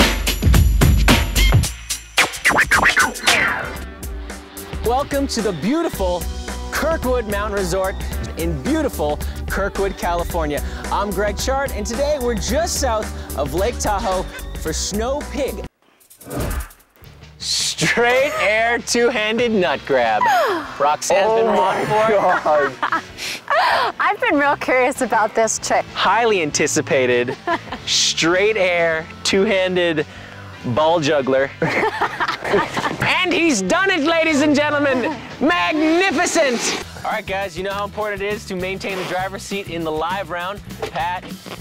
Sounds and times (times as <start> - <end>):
Music: 0.0 - 41.6
Speech: 17.4 - 20.2, 33.0 - 41.3.